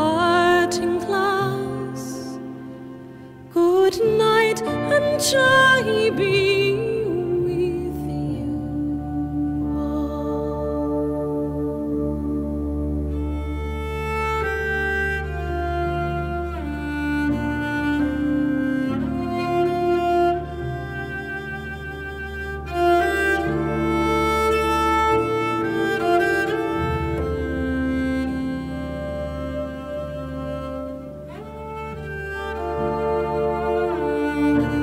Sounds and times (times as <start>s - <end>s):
Violin, fiddle: 0.0s - 34.8s.